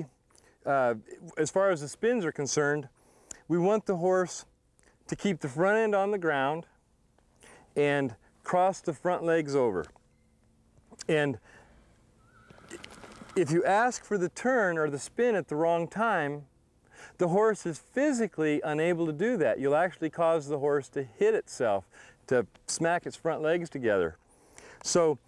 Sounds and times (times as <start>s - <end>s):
Speech: 0.7s - 2.9s, 3.5s - 4.5s, 5.1s - 6.7s, 7.8s - 9.9s, 11.0s - 11.4s, 13.4s - 16.5s, 17.2s - 24.2s, 24.8s - 25.2s.